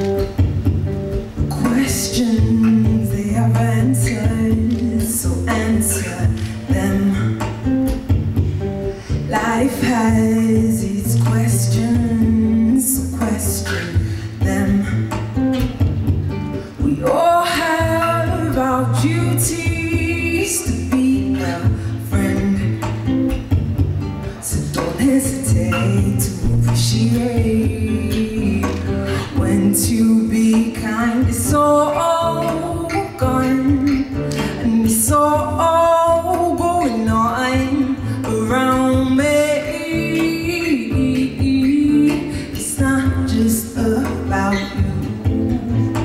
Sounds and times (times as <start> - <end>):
Music: 0.0 - 46.0
Female singing: 1.5 - 8.2, 9.1 - 15.9, 16.7 - 23.2, 24.3 - 46.0.